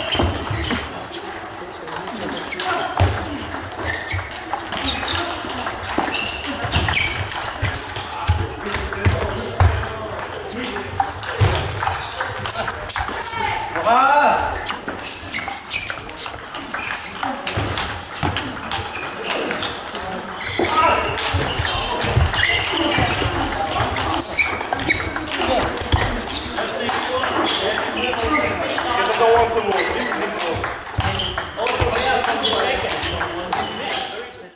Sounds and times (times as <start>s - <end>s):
Speech: 0.0s - 17.7s, 18.3s - 34.5s.